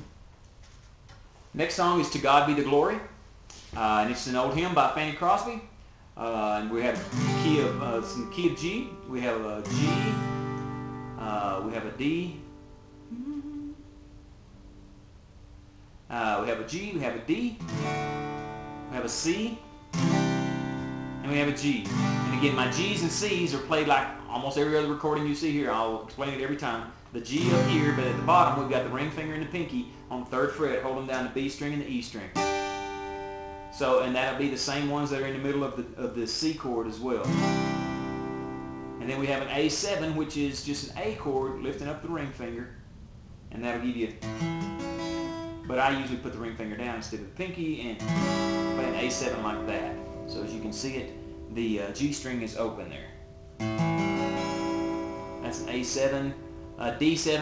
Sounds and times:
Speech: 1.6 - 3.2, 3.8 - 10.2, 11.2 - 12.4, 16.1 - 17.6, 18.9 - 19.6, 21.2 - 32.4, 33.8 - 37.3, 39.0 - 42.8, 43.5 - 44.2, 45.7 - 48.1, 48.8 - 53.1, 55.4 - 57.4
Strum: 6.4 - 14.1, 16.7 - 35.6, 37.1 - 42.4, 43.6 - 57.4.

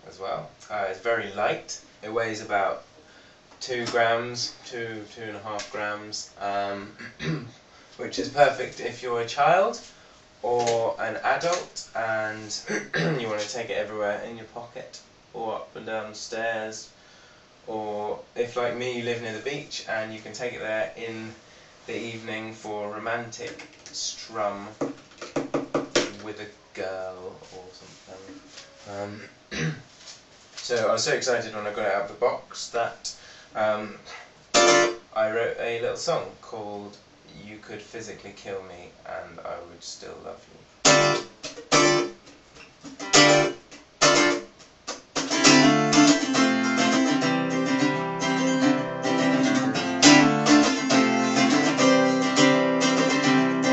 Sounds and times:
Speech: 0.0 - 2.9, 3.6 - 16.9, 17.7 - 24.9, 26.0 - 29.8, 30.6 - 34.3, 35.1 - 40.6.

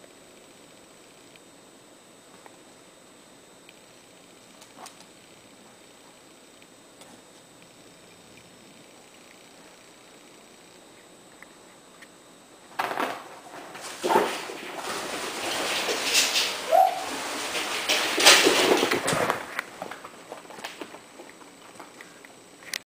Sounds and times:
Animal: 14.0 - 18.8.

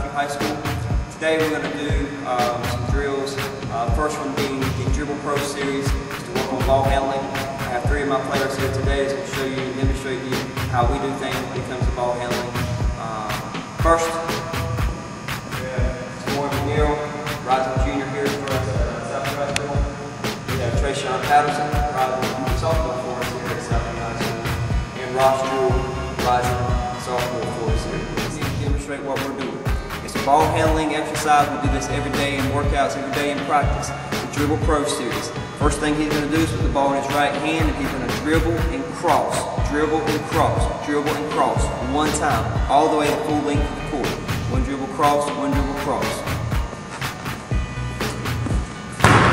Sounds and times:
Speech: 0.0 - 14.4, 15.6 - 19.9, 20.6 - 46.3
Music: 0.0 - 49.3.

